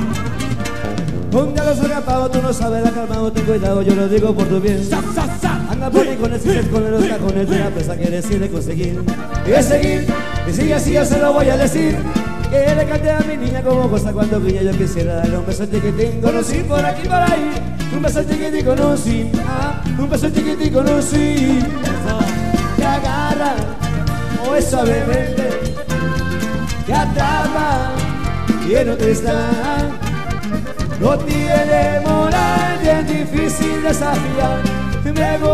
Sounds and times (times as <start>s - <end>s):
Music: 0.0s - 35.5s.